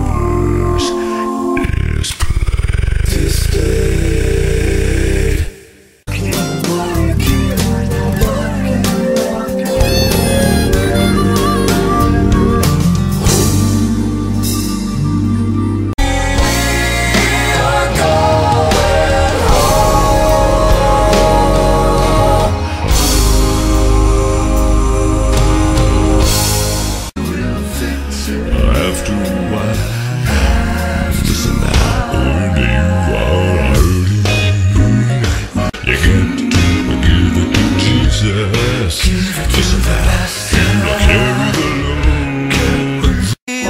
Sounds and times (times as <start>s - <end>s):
Music: 0.0s - 1.6s, 4.4s - 43.6s
Singing: 6.1s - 12.5s, 16.0s - 26.5s, 27.2s - 43.6s.